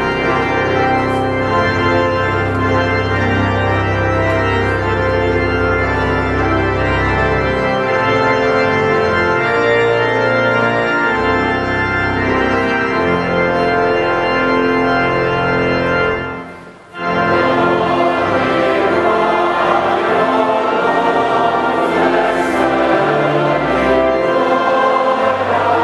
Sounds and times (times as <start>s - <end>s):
Organ: 0.0s - 25.8s
Choir: 17.2s - 25.8s.